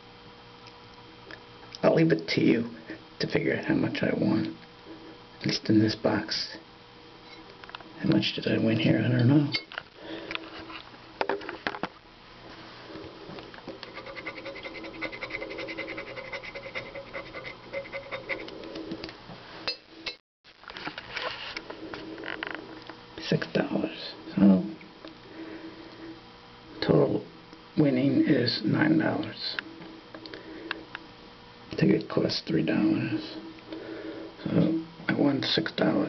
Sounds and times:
Speech: 1.8s - 4.6s, 5.4s - 6.6s, 8.0s - 9.7s, 23.2s - 24.8s, 26.8s - 29.6s, 31.7s - 33.4s, 34.4s - 36.0s.

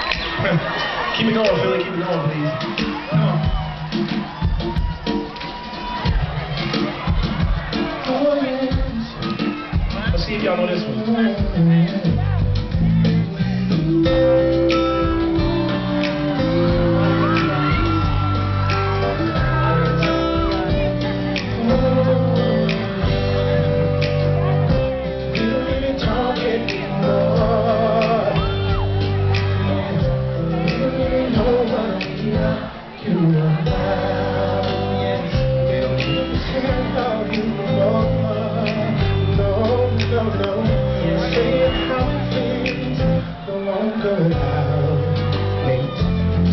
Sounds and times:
Music: 0.0s - 46.5s.

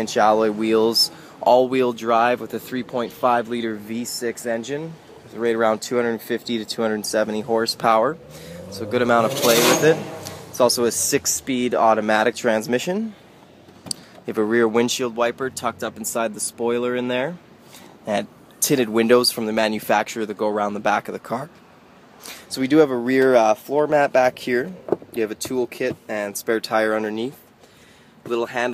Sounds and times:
Speech: 0.0s - 8.2s, 8.8s - 13.2s, 14.3s - 17.4s, 18.0s - 21.5s, 22.5s - 27.4s, 28.3s - 28.7s.

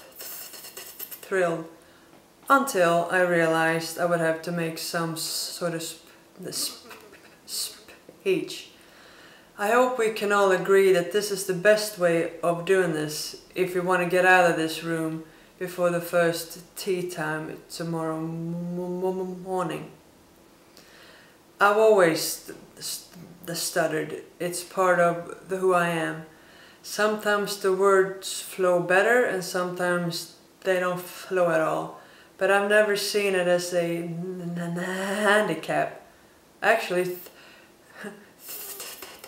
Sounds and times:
Narration, monologue: 0.0s - 39.2s
Female speech, woman speaking: 1.2s - 1.7s, 2.5s - 8.7s, 9.6s - 20.0s, 21.6s - 26.3s, 26.9s - 36.0s, 36.6s - 37.3s.

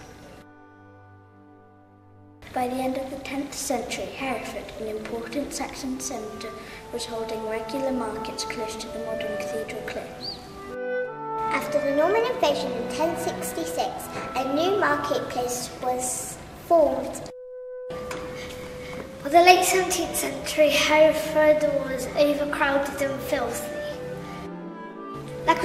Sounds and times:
Music: 0.0s - 25.6s
Speech: 2.5s - 10.3s, 11.5s - 17.3s, 19.2s - 24.0s.

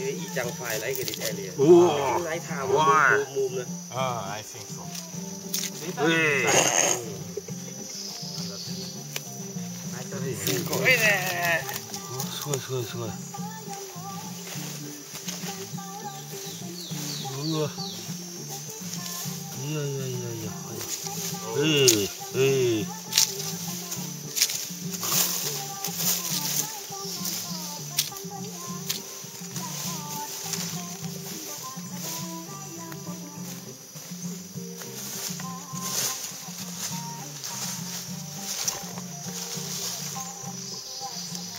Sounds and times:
Music: 0.0s - 41.5s.

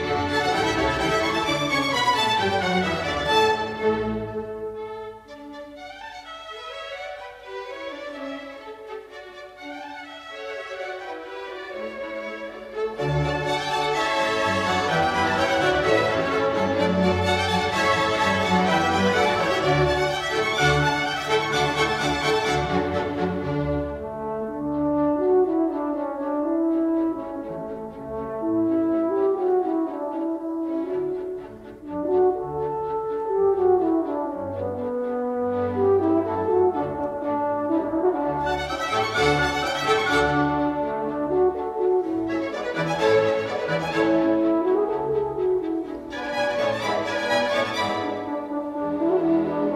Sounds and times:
Violin, fiddle: 0.0s - 24.0s, 38.3s - 49.7s.

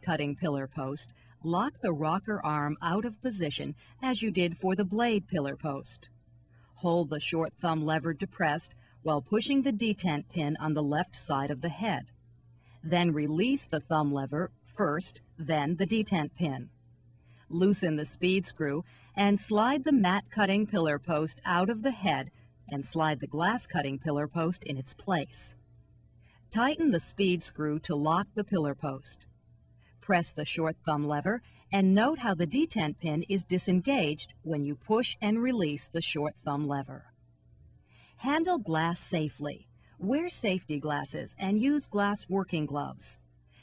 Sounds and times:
Speech: 0.0s - 6.1s, 6.8s - 12.1s, 12.8s - 16.7s, 17.5s - 25.6s, 26.5s - 29.2s, 30.0s - 37.1s, 38.2s - 43.2s.

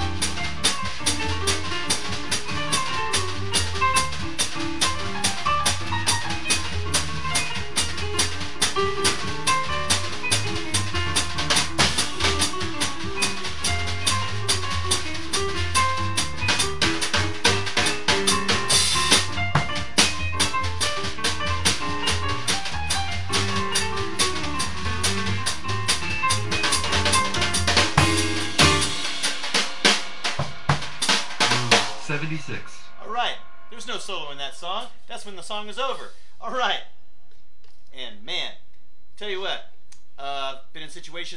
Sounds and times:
Drum: 0.0s - 35.6s
Drum kit: 0.0s - 36.2s
Inside, small room: 0.0s - 41.3s.

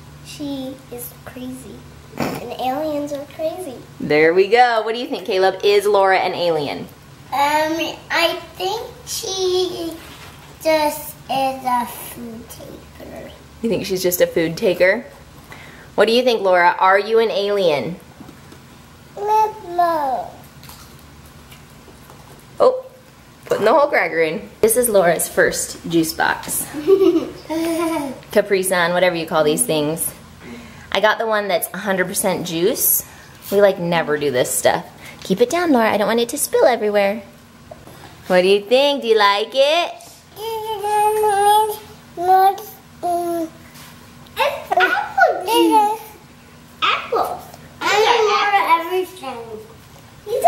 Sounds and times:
Inside, small room: 0.0s - 50.4s
Child speech, kid speaking: 0.3s - 3.9s, 7.3s - 13.4s, 19.2s - 20.4s, 40.4s - 43.6s, 44.4s - 46.2s, 46.8s - 50.4s.

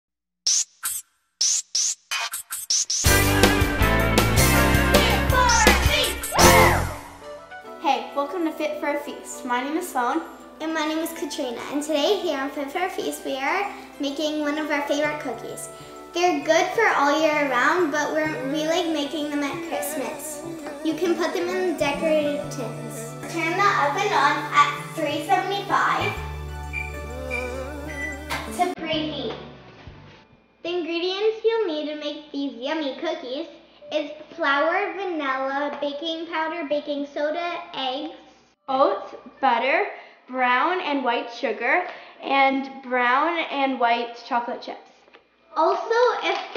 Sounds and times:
Music: 1.4s - 30.9s
Speech: 5.0s - 6.2s, 7.8s - 26.2s, 28.5s - 29.4s, 30.6s - 44.9s, 45.5s - 46.5s.

